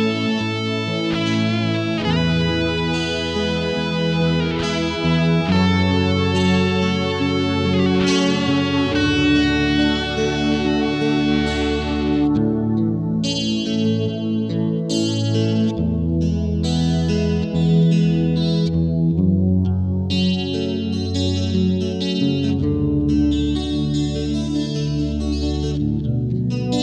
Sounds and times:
Strum: 0.0s - 14.0s
Electric guitar: 0.0s - 26.8s.

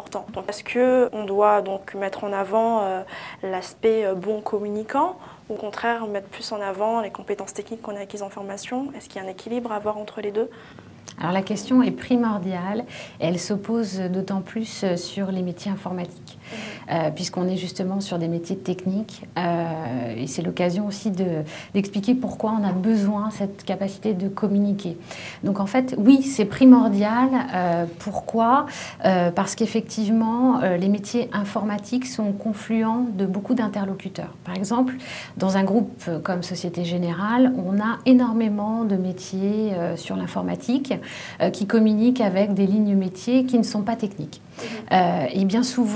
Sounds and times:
Speech: 0.0s - 10.5s, 11.1s - 45.9s.

